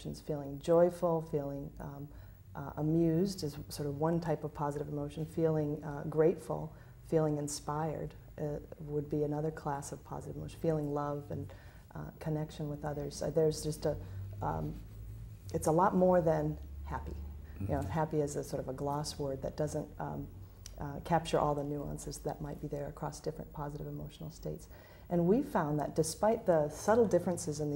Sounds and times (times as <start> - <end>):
Speech: 0.0 - 14.8, 15.5 - 27.7
Inside, small room: 0.0 - 27.7.